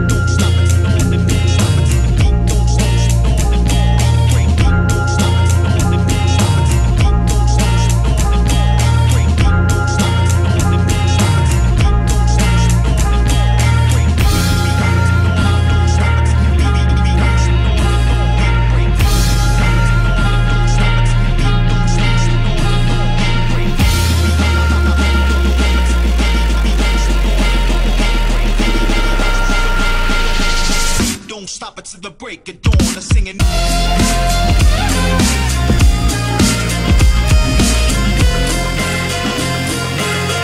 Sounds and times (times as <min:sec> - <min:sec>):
Music: 0:00.0 - 0:40.4.